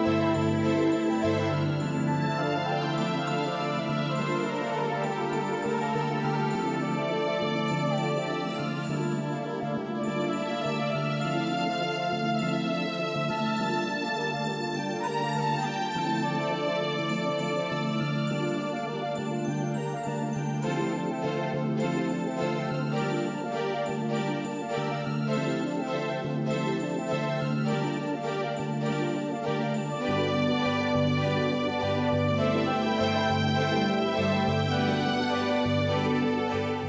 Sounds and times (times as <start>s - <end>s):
Music: 0.0s - 36.8s.